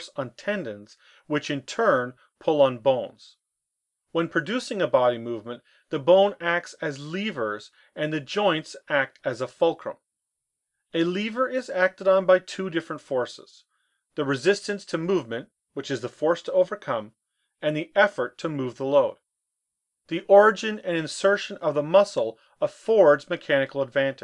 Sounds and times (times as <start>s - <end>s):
Speech: 0.0s - 3.4s, 4.1s - 10.1s, 10.9s - 19.2s, 20.1s - 24.2s.